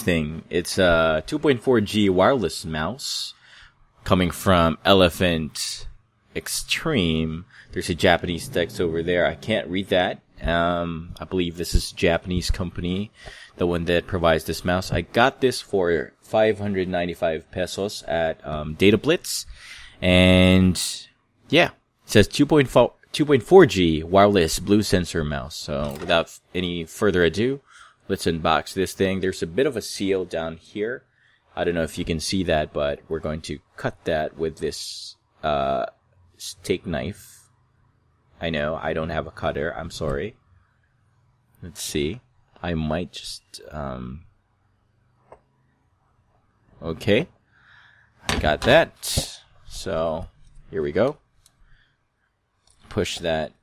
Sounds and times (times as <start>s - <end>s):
Speech: 0.0s - 3.4s, 4.0s - 31.0s, 31.6s - 37.4s, 38.4s - 40.4s, 41.6s - 44.3s, 46.8s - 47.3s, 48.3s - 51.2s, 52.9s - 53.6s.